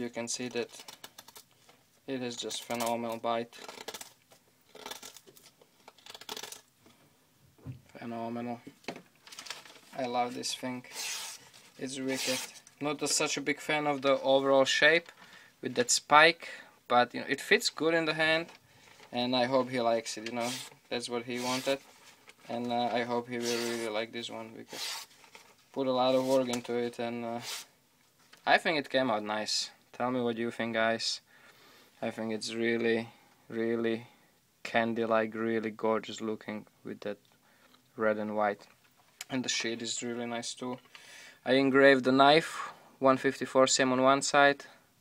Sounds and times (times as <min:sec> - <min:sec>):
Speech: 0:00.0 - 0:00.7, 0:02.1 - 0:03.6, 0:08.0 - 0:08.7, 0:10.0 - 0:10.9, 0:11.8 - 0:18.5, 0:19.2 - 0:21.8, 0:22.5 - 0:24.7, 0:25.8 - 0:27.5, 0:28.4 - 0:31.2, 0:32.0 - 0:37.2, 0:38.0 - 0:40.8, 0:41.5 - 0:44.8
Inside, small room: 0:00.0 - 0:45.0.